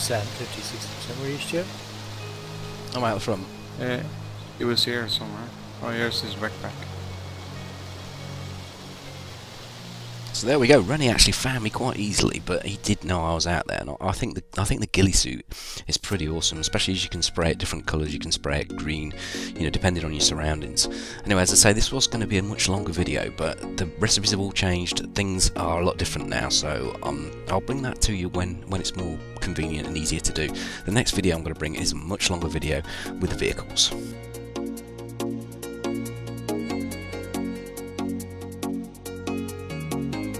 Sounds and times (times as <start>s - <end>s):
Narration, monologue: 0.0s - 8.5s, 9.8s - 40.3s.